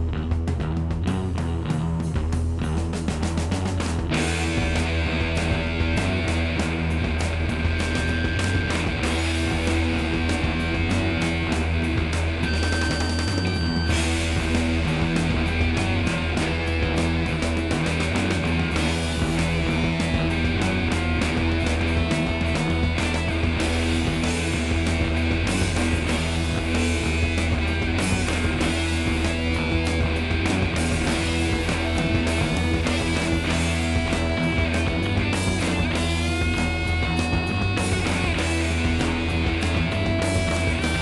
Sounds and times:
Music: 0:00.0 - 0:41.0.

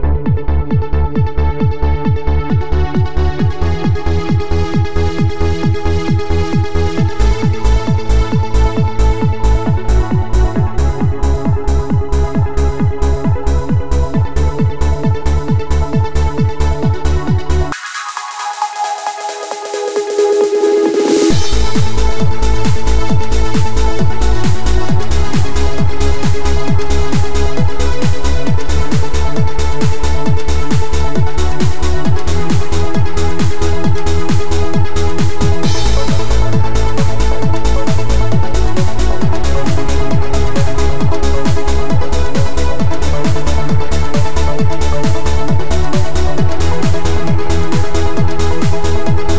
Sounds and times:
Exciting music: 0:00.0 - 0:49.3.

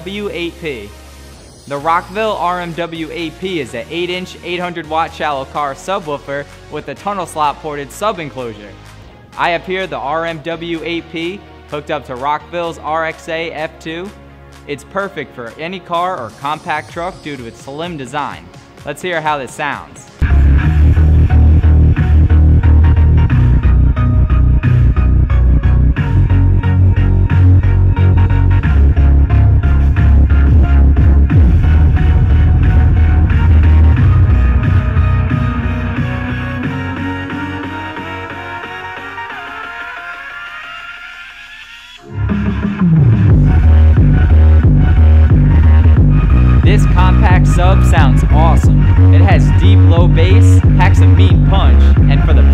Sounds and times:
Speech: 0:00.0 - 0:00.9, 0:01.7 - 0:08.8, 0:09.4 - 0:20.2, 0:46.6 - 0:52.5
Music: 0:00.0 - 0:52.5.

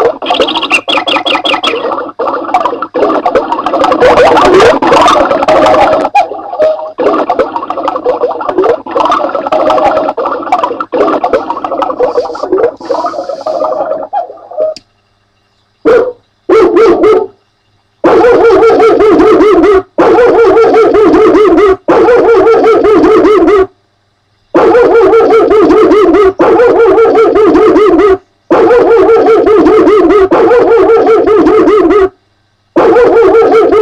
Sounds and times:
Bow-wow: 0:03.8 - 0:14.8, 0:15.8 - 0:17.4, 0:18.0 - 0:23.7, 0:24.6 - 0:32.1, 0:32.8 - 0:33.8
Yip: 0:15.8 - 0:17.4, 0:18.0 - 0:23.7, 0:24.6 - 0:32.1, 0:32.8 - 0:33.8.

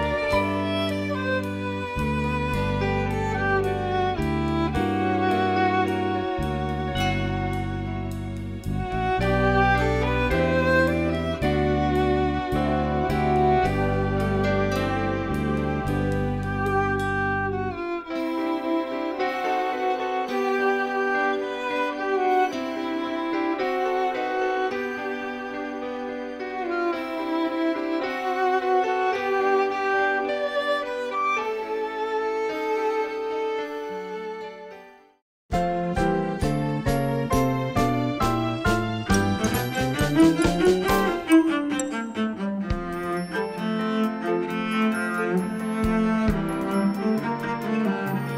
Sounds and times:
Violin, fiddle: 0:00.0 - 0:35.2, 0:35.9 - 0:48.3.

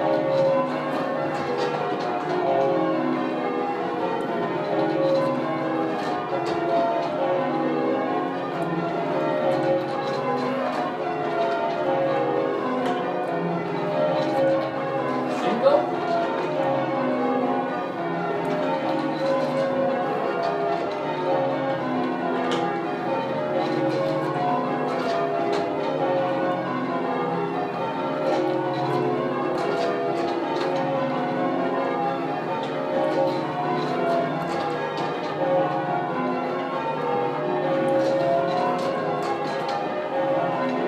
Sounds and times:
Church bell: 0:00.0 - 0:40.8.

